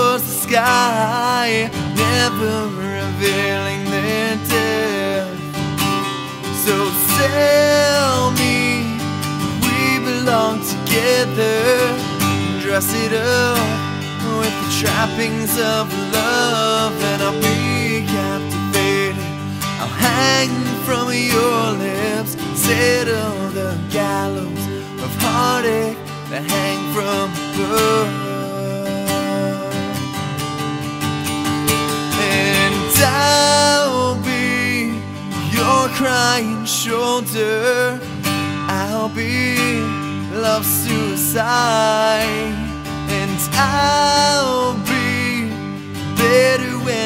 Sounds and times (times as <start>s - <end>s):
Music: 0.0s - 47.0s.